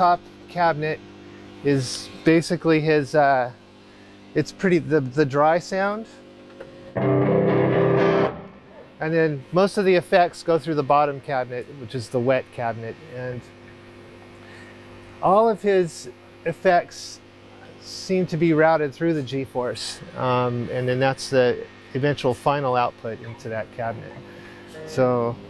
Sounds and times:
Speech: 0:00.0 - 0:01.0, 0:01.6 - 0:03.6, 0:04.4 - 0:06.2, 0:09.0 - 0:13.5, 0:15.2 - 0:24.2, 0:24.8 - 0:25.4
Music: 0:07.0 - 0:08.8, 0:24.7 - 0:25.4.

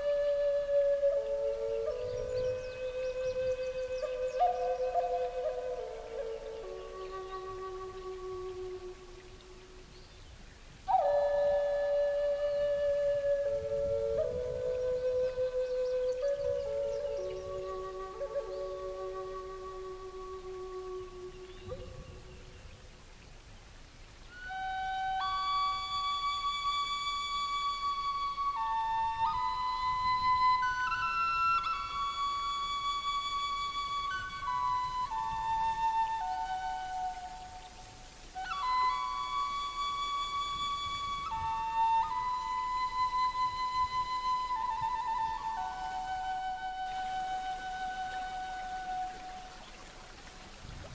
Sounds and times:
Flute: 0:00.0 - 0:22.9, 0:24.2 - 0:50.9.

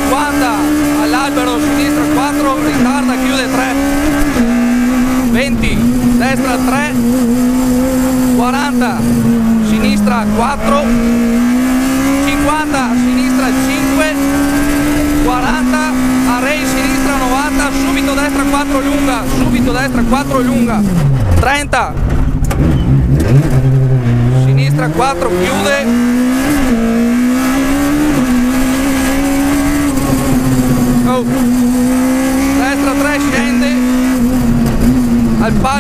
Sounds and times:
Speech: 0:00.0 - 0:03.8, 0:05.3 - 0:07.0, 0:08.4 - 0:09.0, 0:09.7 - 0:11.0, 0:12.3 - 0:14.2, 0:15.2 - 0:20.8, 0:21.4 - 0:22.0, 0:24.4 - 0:25.9, 0:31.0 - 0:31.4, 0:32.6 - 0:33.8, 0:35.4 - 0:35.8
Car: 0:00.0 - 0:35.8.

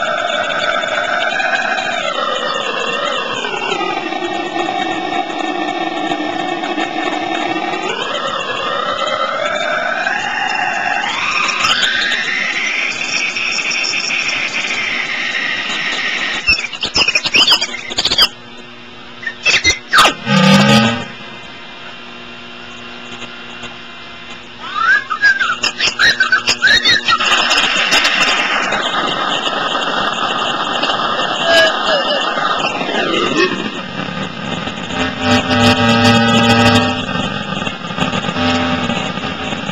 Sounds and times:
Hum: 0:00.0 - 0:39.7.

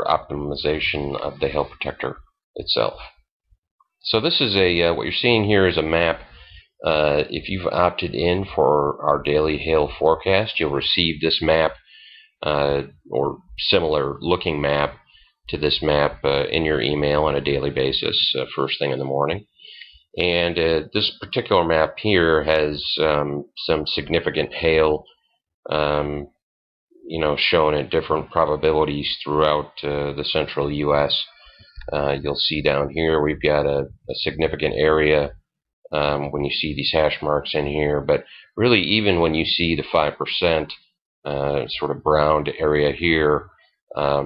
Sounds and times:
Speech: 0:00.0 - 0:03.2, 0:04.0 - 0:26.4, 0:27.0 - 0:44.2.

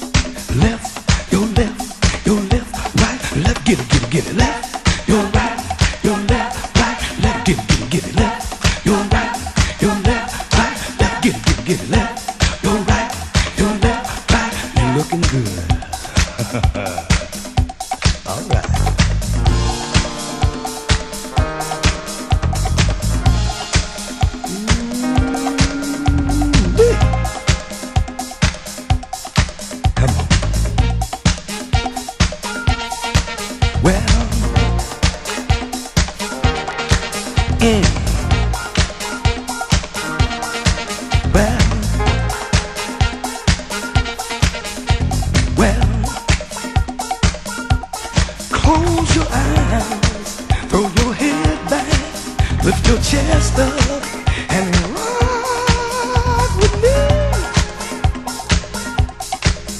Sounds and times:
Disco: 0:00.0 - 0:59.7
Pop music: 0:00.0 - 0:59.7.

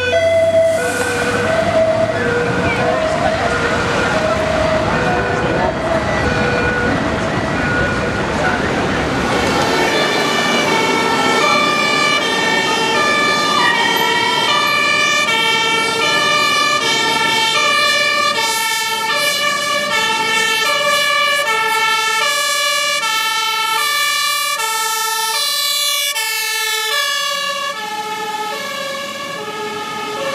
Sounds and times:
Fire engine, fire truck (siren): 0:00.0 - 0:30.3.

